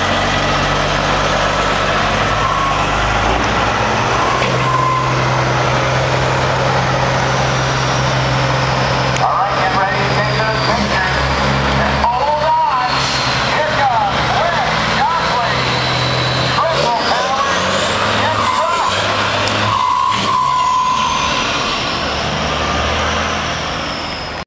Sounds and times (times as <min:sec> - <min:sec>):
Truck: 0:00.0 - 0:24.4
Speech: 0:09.2 - 0:15.8, 0:16.5 - 0:19.5.